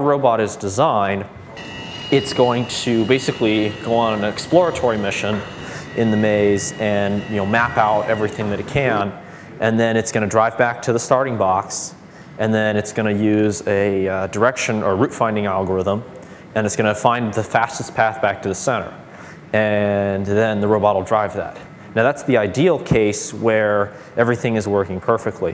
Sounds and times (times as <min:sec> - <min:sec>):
Speech: 0:00.0 - 0:01.3, 0:02.1 - 0:25.5.